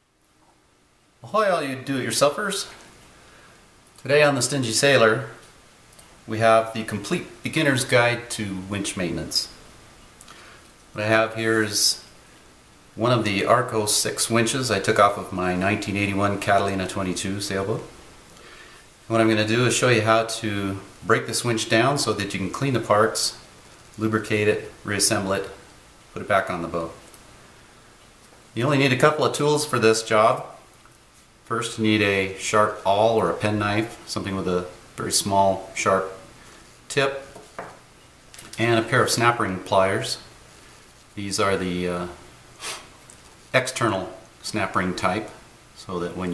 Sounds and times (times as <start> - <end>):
Speech: 1.2 - 2.8, 4.0 - 5.4, 6.3 - 9.6, 10.9 - 12.1, 13.0 - 18.0, 19.1 - 23.4, 24.0 - 27.0, 28.6 - 30.7, 31.5 - 36.3, 36.9 - 37.4, 38.6 - 40.3, 41.2 - 42.3, 43.5 - 46.3.